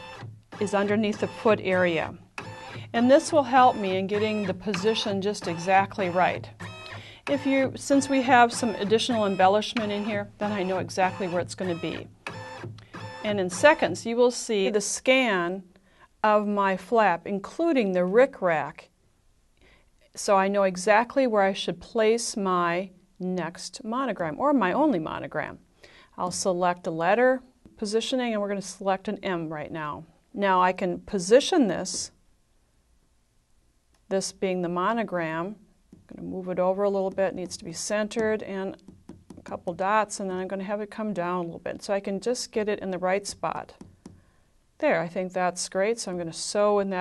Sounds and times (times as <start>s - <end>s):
Sewing machine: 0.0s - 13.9s
Speech: 0.6s - 2.2s, 2.9s - 6.5s, 7.3s - 12.1s, 13.2s - 15.7s, 16.3s - 18.9s, 20.2s - 25.6s, 26.2s - 32.2s, 34.1s - 38.8s, 39.4s - 43.8s, 44.8s - 47.0s.